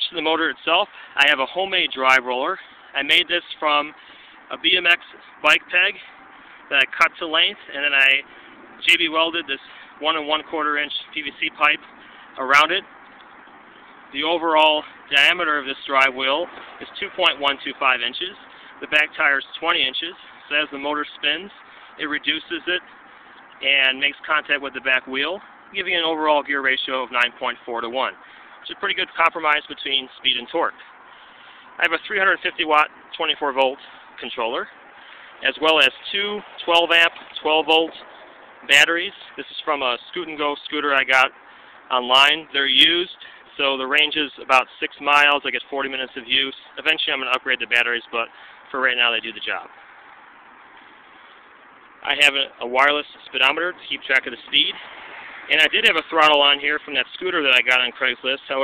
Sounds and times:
Speech: 0.0 - 6.1, 6.7 - 11.8, 12.4 - 12.9, 14.2 - 22.9, 23.6 - 30.8, 31.8 - 34.8, 35.4 - 38.0, 38.7 - 49.7, 52.0 - 54.8, 55.5 - 58.6.

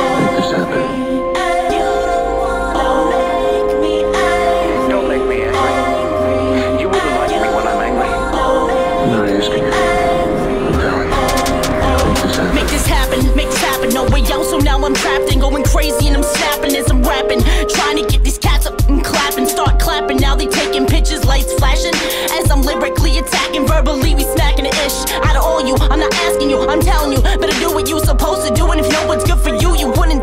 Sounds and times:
Speech: 0.0 - 1.0, 4.6 - 5.9, 6.6 - 8.4, 9.0 - 12.9
Hip hop music: 0.0 - 30.2.

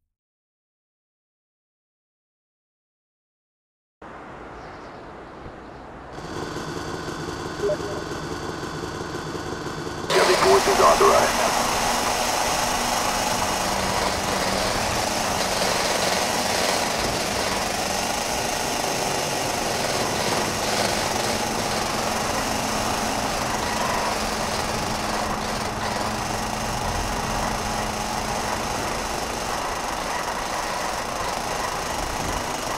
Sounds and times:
Speech: 10.1 - 11.6.

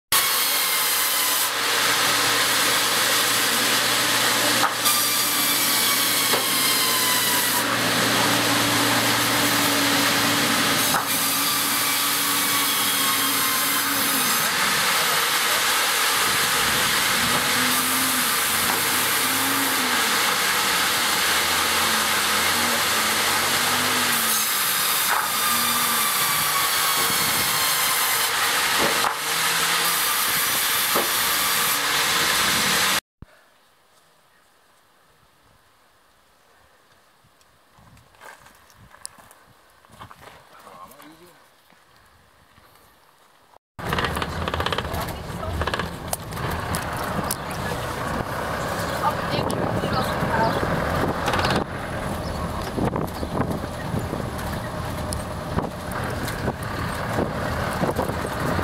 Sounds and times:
Sawing: 0.1 - 33.0, 43.8 - 58.6
Wood: 0.2 - 33.0, 43.8 - 47.8, 51.0 - 51.7.

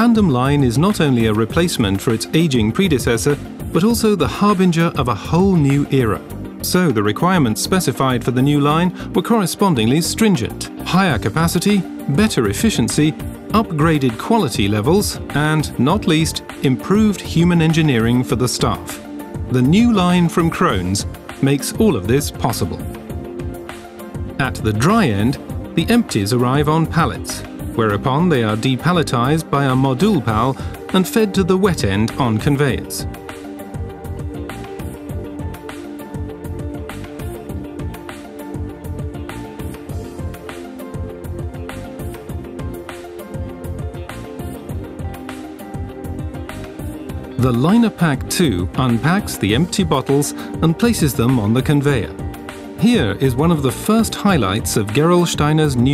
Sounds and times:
Speech: 0.0 - 22.9, 24.4 - 33.1, 47.4 - 52.2, 52.8 - 55.9
Music: 0.0 - 55.9.

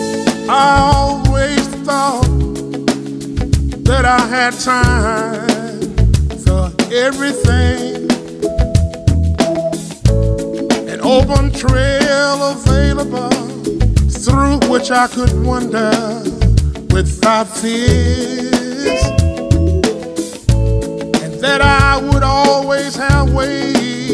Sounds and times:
Music: 0.0 - 24.1.

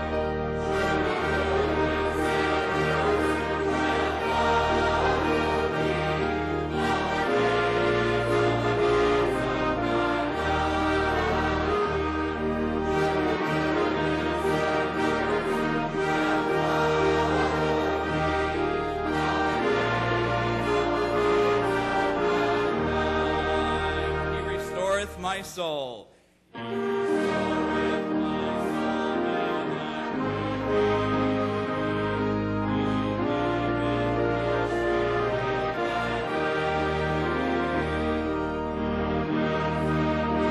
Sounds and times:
Choir: 0.0 - 24.9, 26.6 - 40.5.

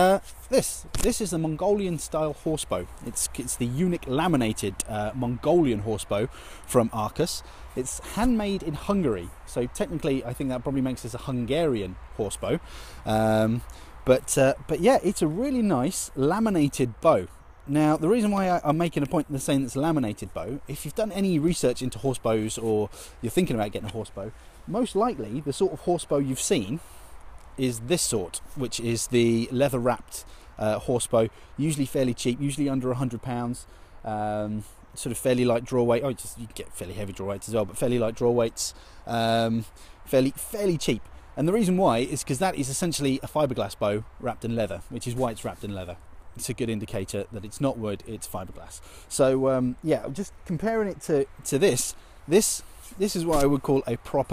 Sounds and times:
Speech: 0.0 - 26.8, 27.6 - 54.3.

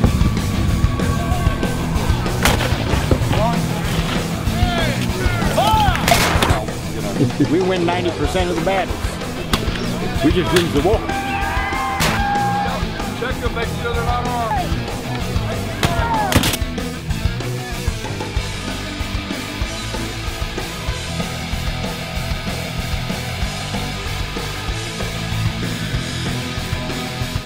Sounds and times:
Heavy metal: 0.0 - 27.4
Progressive rock: 0.0 - 27.4
Rock and roll: 0.0 - 27.4.

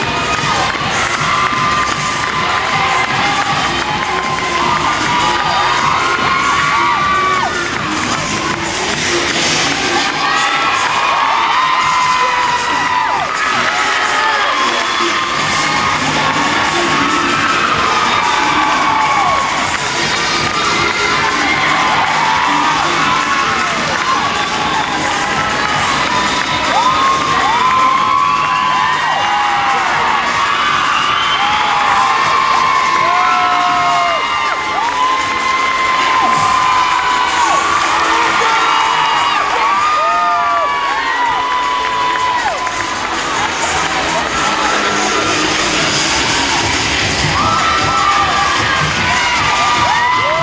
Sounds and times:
Cheering: 0.0 - 50.4
Crowd: 0.0 - 50.4
Music: 0.0 - 50.4.

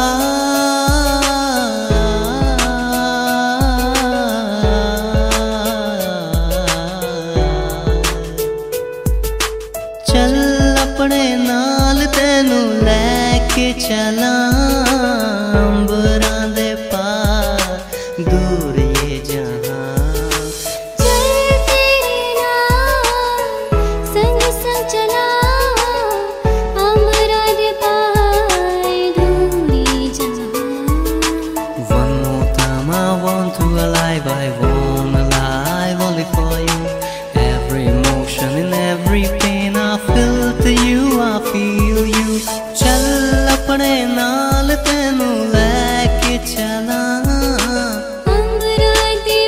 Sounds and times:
Music: 0.0 - 49.4.

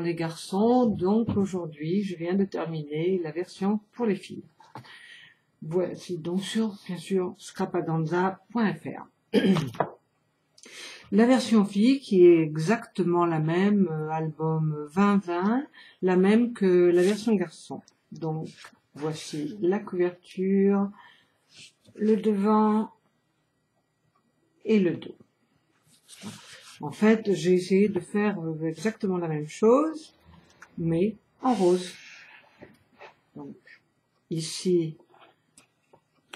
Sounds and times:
Speech: 0.0 - 4.5, 5.6 - 9.8, 11.1 - 21.0, 21.9 - 23.0, 24.6 - 25.3, 26.1 - 32.3, 33.4 - 35.2.

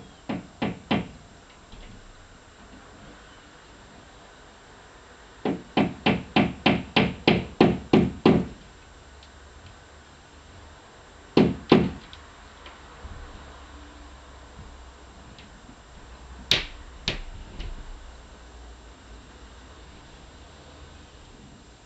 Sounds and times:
Inside, small room: 0.0 - 21.8.

